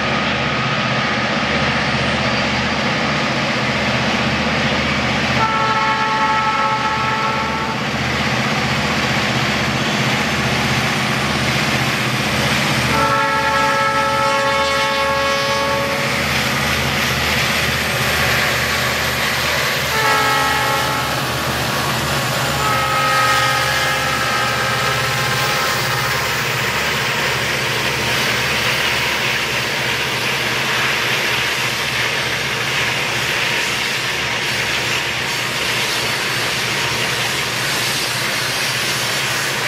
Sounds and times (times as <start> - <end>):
Railroad car, train wagon: 0.0 - 39.6
Train: 0.0 - 39.6.